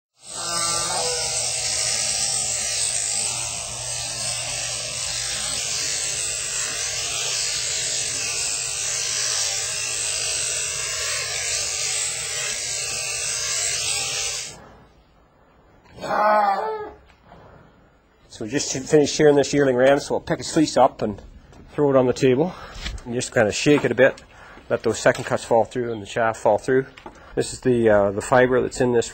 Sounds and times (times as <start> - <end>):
Electric shaver, electric razor: 0.1 - 14.6.